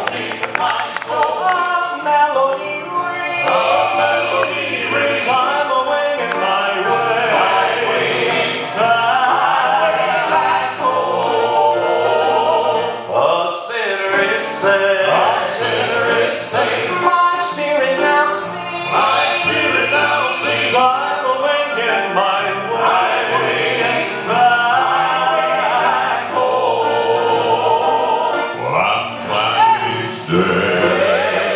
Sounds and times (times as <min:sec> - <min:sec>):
Choir: 0:00.0 - 0:31.5.